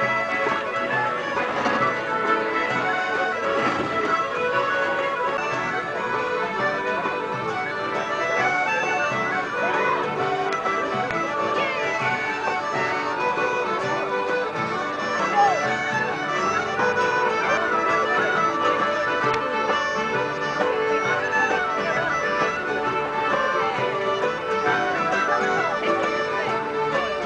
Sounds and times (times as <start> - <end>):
Traditional music: 0.0 - 27.2.